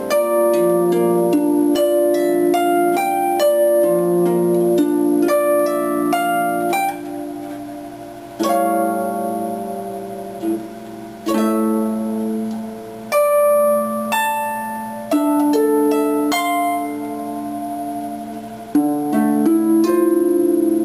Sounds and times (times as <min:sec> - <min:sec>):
Classical music: 0:00.0 - 0:20.8
Harp: 0:00.0 - 0:20.8.